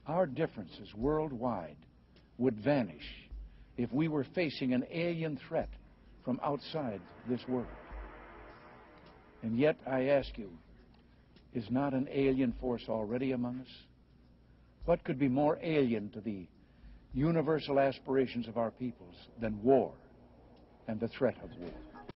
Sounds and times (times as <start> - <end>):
Male speech, man speaking: 0.0 - 1.8, 2.4 - 7.8, 9.4 - 10.6, 11.6 - 13.9, 14.9 - 16.5, 17.2 - 20.0, 20.9 - 21.8
Narration, monologue: 0.0 - 21.8.